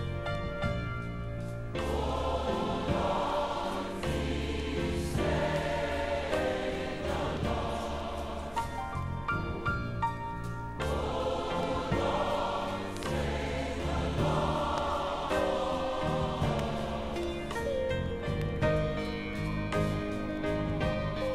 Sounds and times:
Gospel music: 0:00.0 - 0:21.3
Choir: 0:01.7 - 0:21.3.

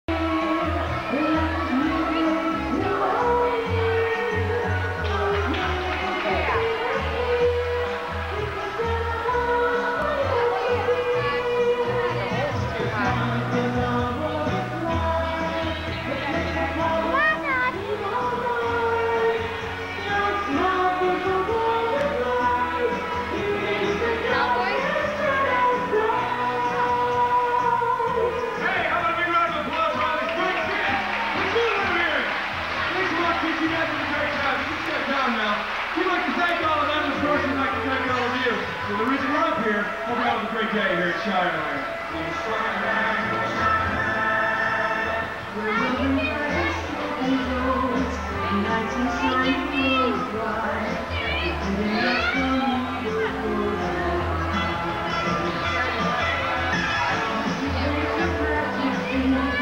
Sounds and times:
Music: 0:00.0 - 0:59.6.

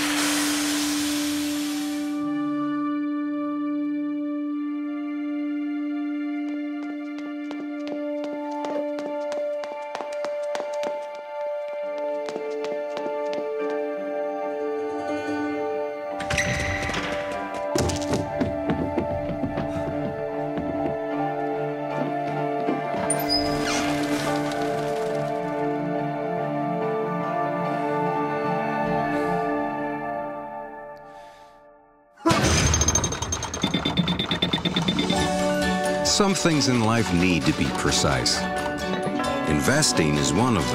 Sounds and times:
Music: 0:00.0 - 0:40.7
Speech: 0:36.0 - 0:38.5, 0:39.5 - 0:40.7.

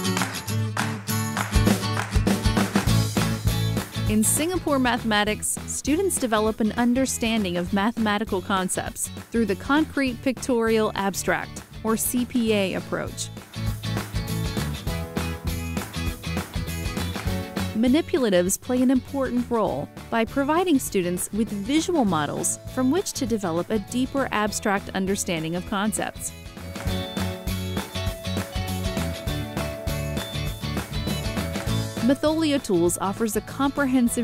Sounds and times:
Music: 0:00.0 - 0:34.2
Speech: 0:04.1 - 0:13.3, 0:17.8 - 0:26.3, 0:32.0 - 0:34.2.

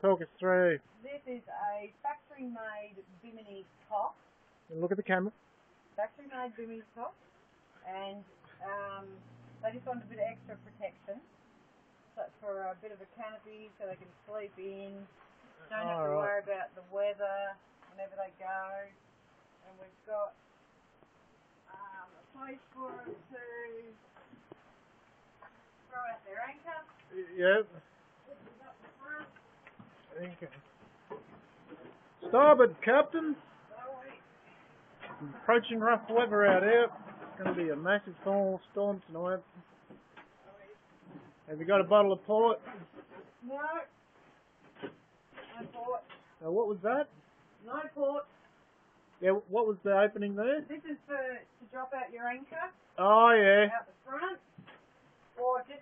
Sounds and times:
Speech: 0:15.7 - 0:18.9, 0:21.7 - 0:24.0.

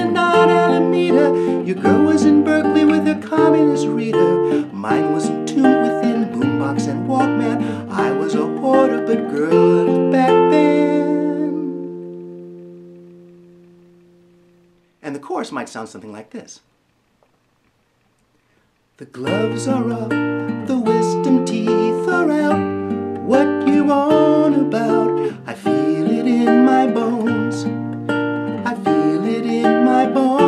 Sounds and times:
Guitar: 0:00.0 - 0:16.5, 0:17.2 - 0:30.4
Inside, small room: 0:00.0 - 0:30.4
Speech: 0:15.0 - 0:16.7, 0:19.0 - 0:19.4.

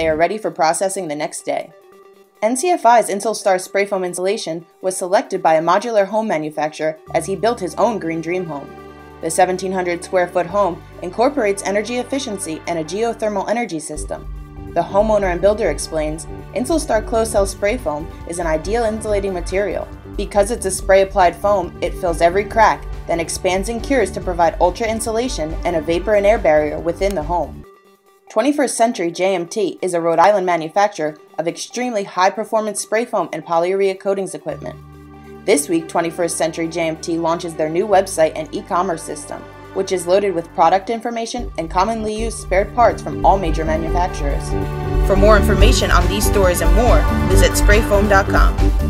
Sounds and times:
Speech: 0:00.0 - 0:01.7, 0:02.4 - 0:14.2, 0:14.8 - 0:27.6, 0:28.3 - 0:34.8, 0:35.5 - 0:48.6
Music: 0:00.0 - 0:48.8.

